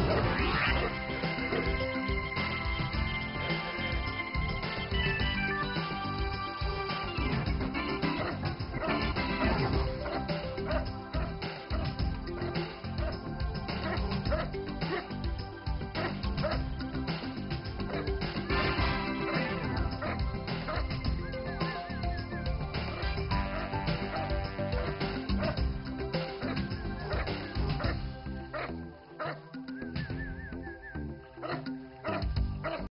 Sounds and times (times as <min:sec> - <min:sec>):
Music: 0:00.0 - 0:32.9
Dog: 0:13.8 - 0:15.1, 0:16.0 - 0:16.6, 0:19.3 - 0:20.8, 0:26.4 - 0:29.4, 0:31.4 - 0:32.9.